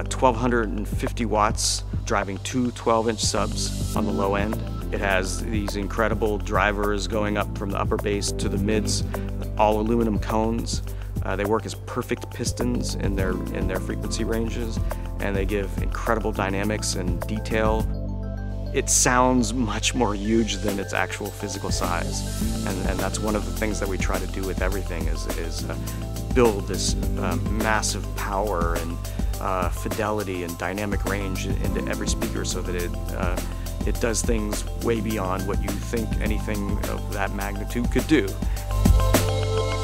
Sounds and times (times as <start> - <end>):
Speech: 0.0 - 17.9, 18.8 - 38.5
Music: 0.0 - 39.8.